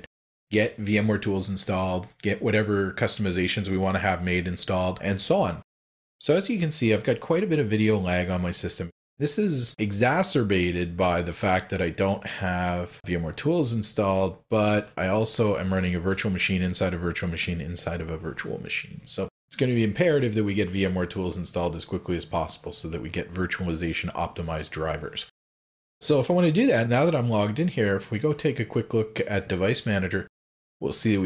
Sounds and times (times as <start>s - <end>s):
Speech: 0.0s - 25.4s, 26.0s - 31.2s.